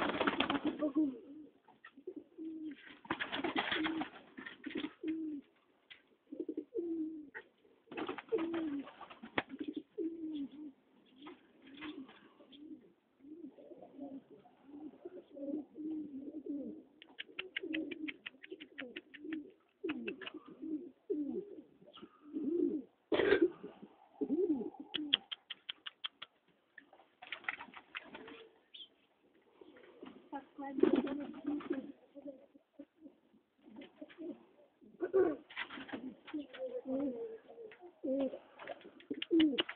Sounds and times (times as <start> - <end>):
Pigeon, dove: 0.0 - 39.7
Speech: 30.3 - 31.6.